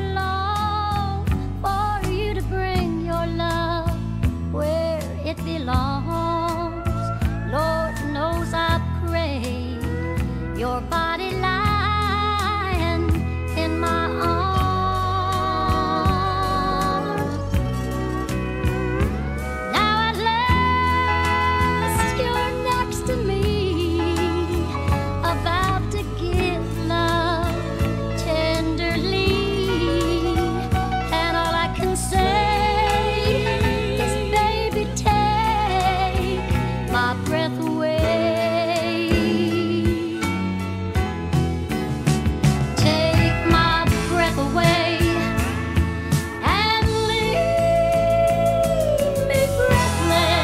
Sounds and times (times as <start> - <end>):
Country: 0.0 - 50.4.